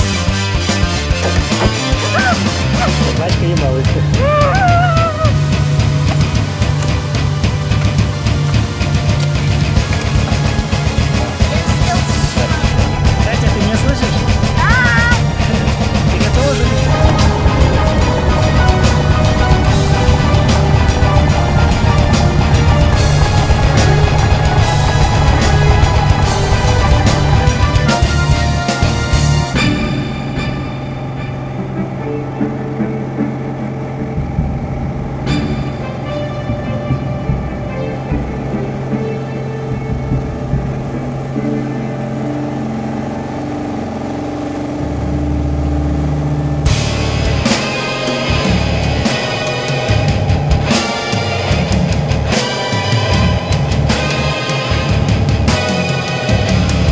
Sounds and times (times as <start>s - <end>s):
Music: 0.0s - 56.9s
Speech: 2.9s - 4.3s.